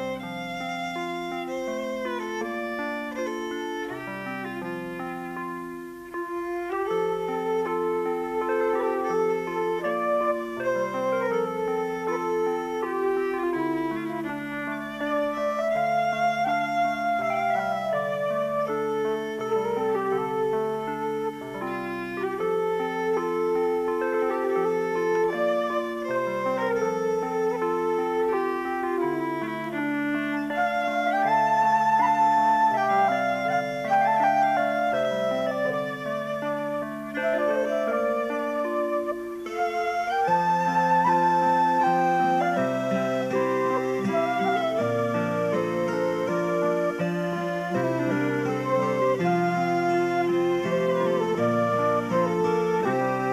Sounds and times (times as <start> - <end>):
Music: 0.0 - 53.3.